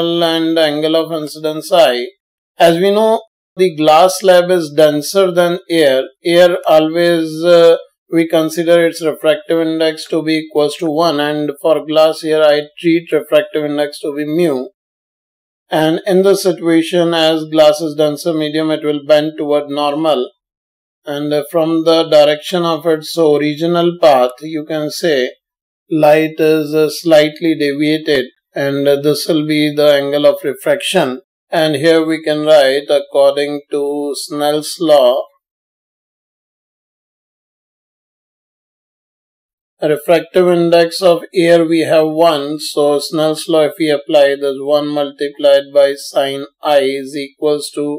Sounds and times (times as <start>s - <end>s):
Speech: 0.0s - 14.8s, 15.7s - 20.4s, 21.1s - 35.4s, 39.8s - 47.9s.